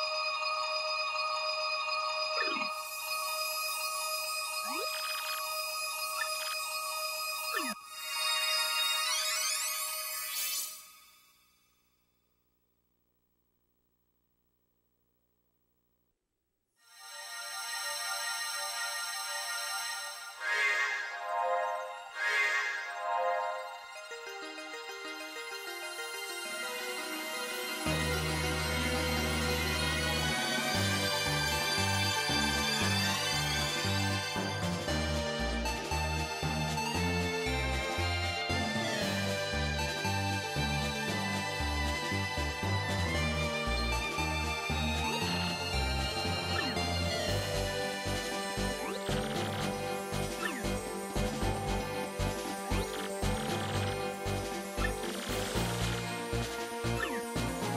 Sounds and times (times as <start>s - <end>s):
Music: 0.0s - 12.0s, 16.8s - 57.7s.